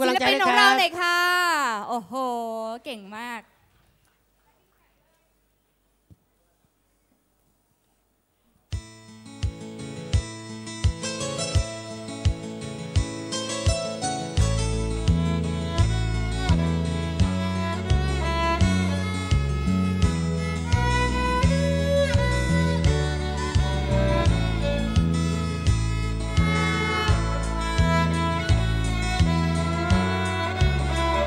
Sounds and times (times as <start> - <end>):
Bluegrass: 8.8 - 31.2
Violin, fiddle: 13.4 - 31.2.